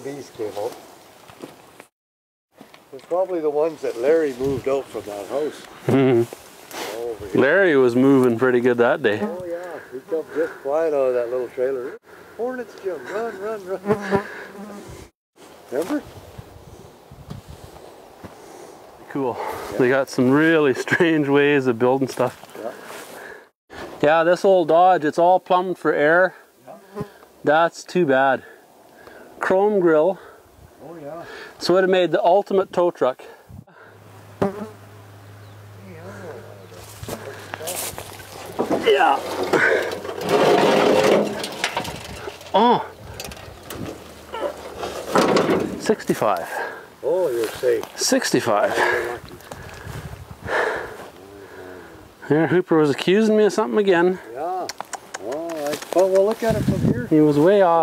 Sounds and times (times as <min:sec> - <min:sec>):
Speech: 0:00.0 - 0:00.8, 0:02.9 - 0:05.6, 0:15.7 - 0:16.0, 0:45.8 - 0:49.2, 0:52.3 - 0:57.8.